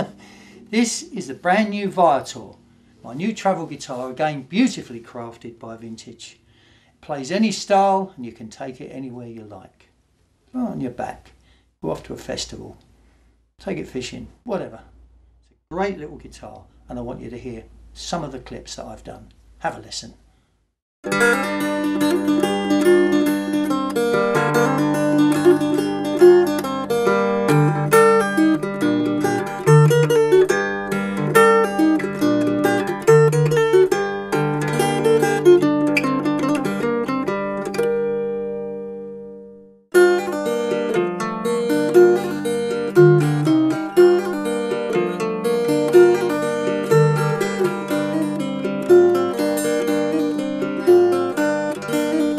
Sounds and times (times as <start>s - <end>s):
Speech: 0.7s - 6.4s, 7.0s - 9.9s, 10.6s - 12.8s, 13.6s - 15.0s, 15.7s - 20.2s
Acoustic guitar: 21.0s - 52.3s
Strum: 21.0s - 52.3s.